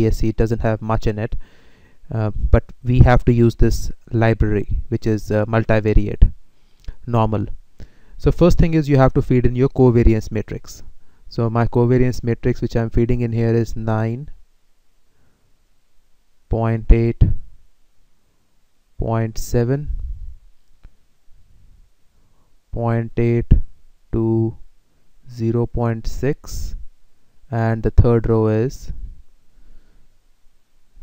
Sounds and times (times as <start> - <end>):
Speech: 0.0 - 1.4, 2.1 - 6.4, 7.0 - 7.6, 8.2 - 14.4, 16.5 - 17.4, 19.0 - 20.0, 22.7 - 24.6, 25.3 - 26.8, 27.5 - 29.0.